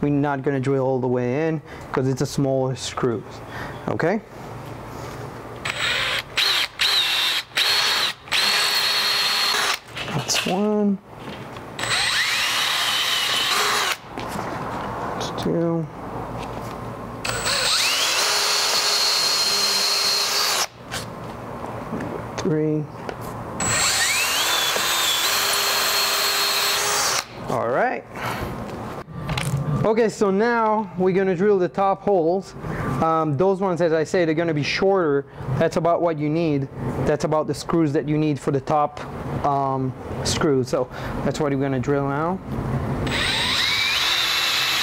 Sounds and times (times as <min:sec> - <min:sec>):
Speech: 0:00.0 - 0:04.3, 0:10.2 - 0:11.0, 0:15.2 - 0:15.9, 0:22.4 - 0:22.9, 0:27.5 - 0:28.1, 0:29.8 - 0:42.4
Drill: 0:05.6 - 0:09.9, 0:11.8 - 0:14.1, 0:17.2 - 0:20.8, 0:23.6 - 0:27.4, 0:43.1 - 0:44.8.